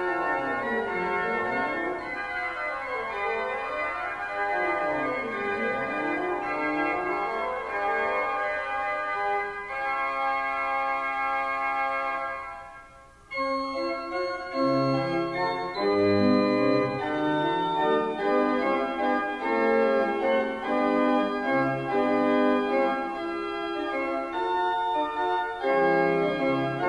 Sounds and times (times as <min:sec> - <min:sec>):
Hammond organ: 0:00.0 - 0:26.8.